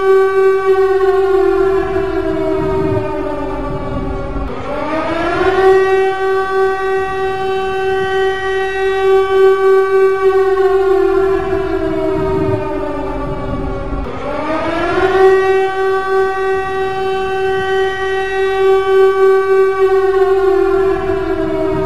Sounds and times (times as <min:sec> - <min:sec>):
Siren: 0:00.0 - 0:21.8.